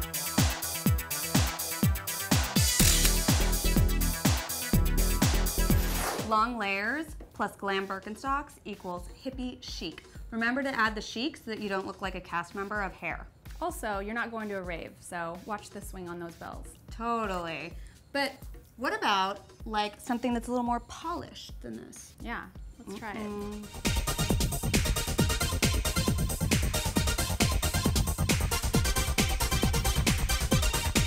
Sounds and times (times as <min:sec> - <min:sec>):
Music: 0:00.0 - 0:31.0.